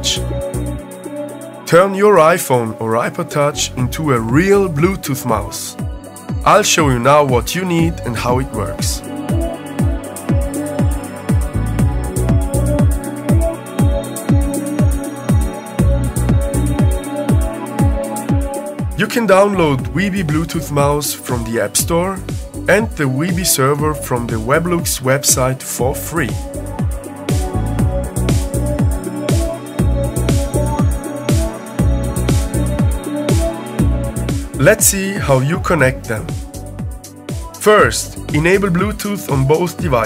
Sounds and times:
Speech: 0:00.0 - 0:00.3, 0:01.7 - 0:05.8, 0:06.4 - 0:09.0, 0:19.0 - 0:26.4, 0:34.6 - 0:36.4, 0:37.6 - 0:40.0
Music: 0:00.0 - 0:40.0.

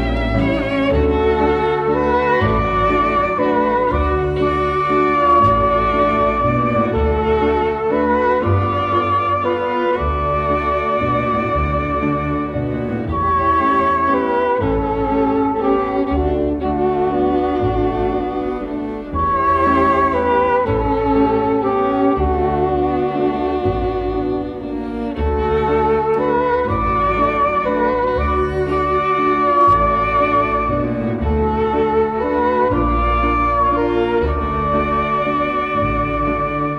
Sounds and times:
String section: 0:00.0 - 0:36.7.

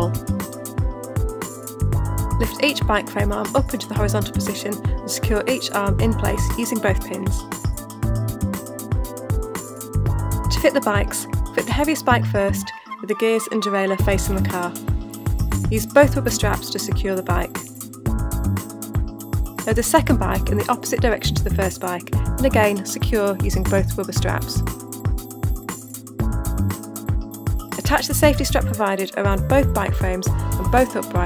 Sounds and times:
Music: 0:00.0 - 0:31.2
Speech: 0:02.4 - 0:07.4, 0:10.5 - 0:14.8, 0:15.7 - 0:17.6, 0:19.7 - 0:24.6, 0:27.8 - 0:31.2.

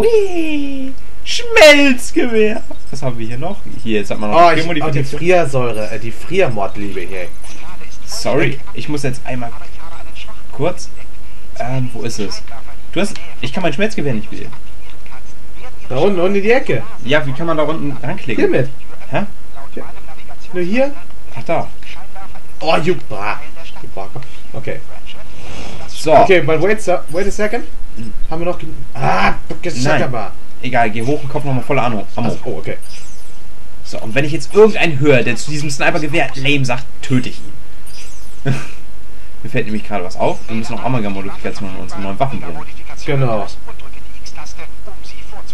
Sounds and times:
Speech: 0:00.0 - 0:24.9, 0:25.9 - 0:32.8, 0:33.9 - 0:37.4, 0:39.4 - 0:45.5.

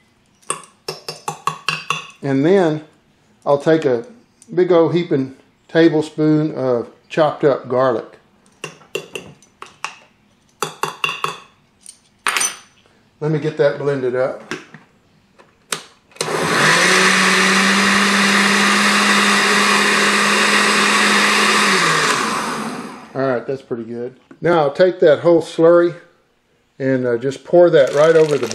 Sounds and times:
Inside, small room: 0:00.0 - 0:28.5
Speech: 0:02.2 - 0:08.2, 0:13.2 - 0:14.5, 0:23.2 - 0:26.1, 0:26.8 - 0:28.5
Blender: 0:16.2 - 0:23.2, 0:27.8 - 0:28.5.

